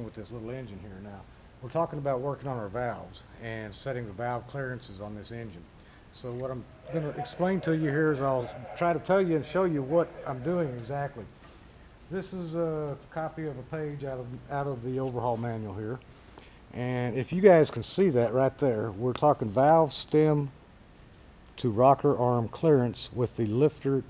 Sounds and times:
Speech: 0:00.0 - 0:11.3, 0:12.1 - 0:16.0, 0:16.8 - 0:20.6, 0:21.6 - 0:24.0.

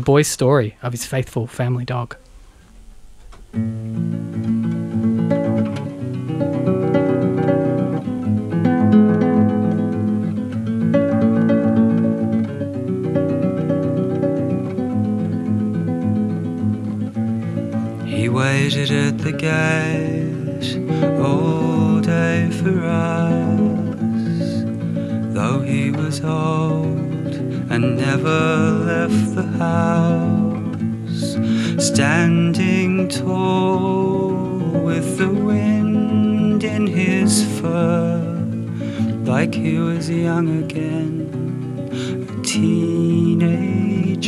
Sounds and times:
Music: 0:02.6 - 0:44.2.

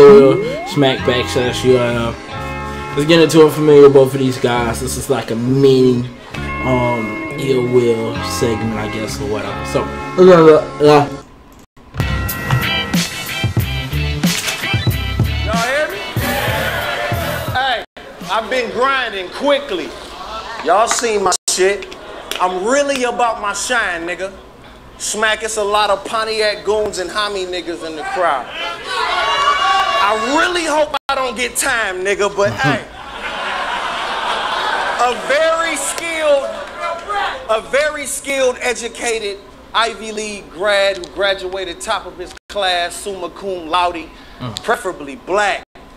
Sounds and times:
Speech: 0:00.0 - 0:02.2, 0:03.0 - 0:11.2, 0:17.6 - 0:20.0, 0:20.6 - 0:24.4, 0:25.0 - 0:28.5, 0:30.0 - 0:32.9, 0:35.0 - 0:45.6
Music: 0:00.0 - 0:05.1, 0:06.3 - 0:18.6.

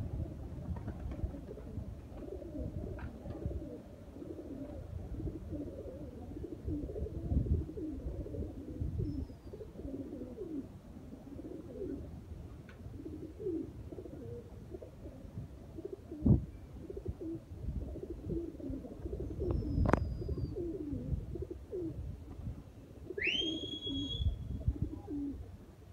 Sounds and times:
Outside, rural or natural: 0:00.0 - 0:25.9
Pigeon, dove: 0:00.2 - 0:12.1, 0:12.7 - 0:25.5.

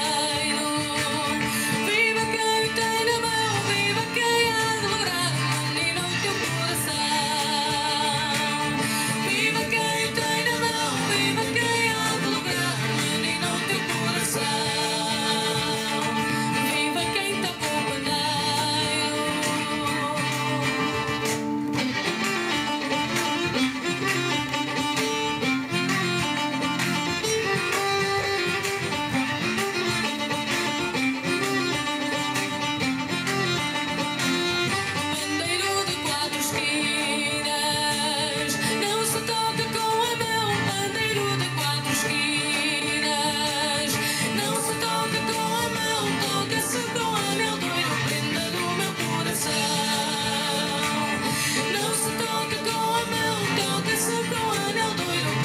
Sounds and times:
Singing: 0:00.0 - 0:21.4, 0:35.0 - 0:55.4
Music: 0:00.0 - 0:55.4.

